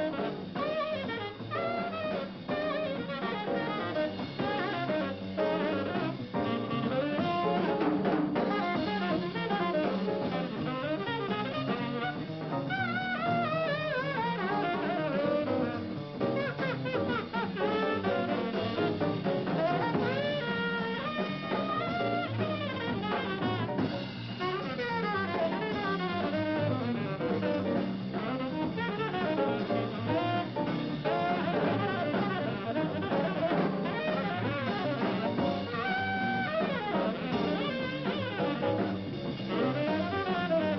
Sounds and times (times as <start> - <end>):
Independent music: 0.0 - 40.7.